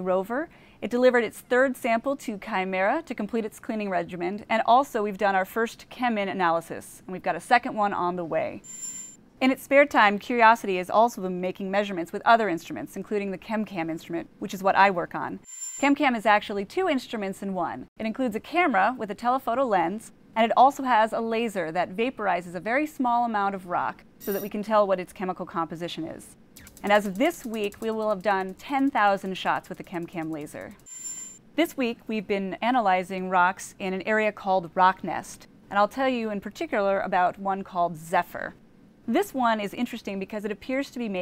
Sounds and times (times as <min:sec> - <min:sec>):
Speech: 0:00.0 - 0:08.6, 0:09.4 - 0:30.8, 0:31.6 - 0:41.2.